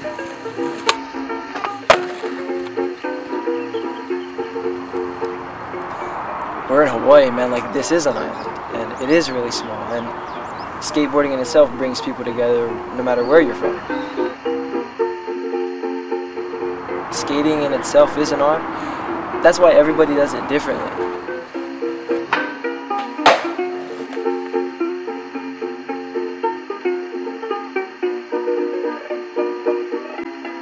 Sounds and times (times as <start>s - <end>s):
Music: 0.0s - 30.6s
Speech: 6.7s - 10.1s, 10.8s - 13.7s, 17.1s - 18.6s, 19.4s - 21.0s.